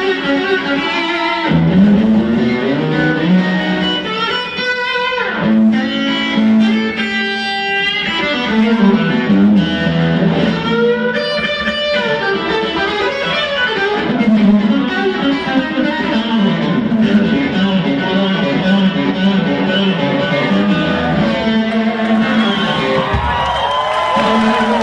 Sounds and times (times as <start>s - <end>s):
Electric guitar: 0.0s - 24.8s.